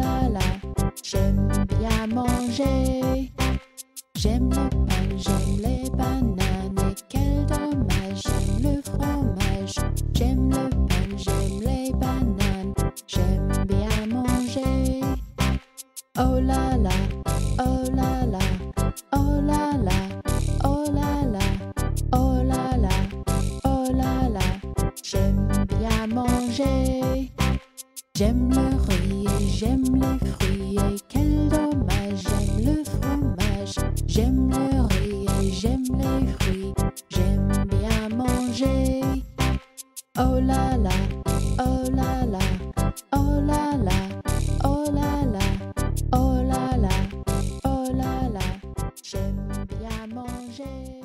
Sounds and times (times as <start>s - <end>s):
Music: 0.0s - 51.0s.